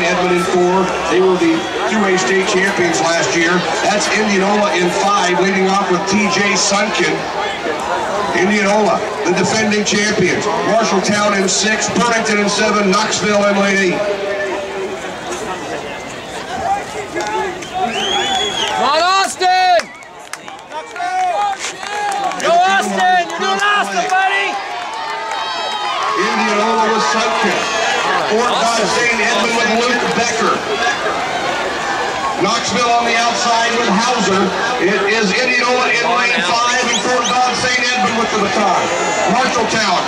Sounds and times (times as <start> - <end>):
Speech: 0.0 - 7.3, 8.3 - 14.5, 22.4 - 24.6, 26.2 - 30.6, 32.4 - 40.0
Outside, urban or manmade: 0.0 - 40.0
Run: 13.9 - 40.0.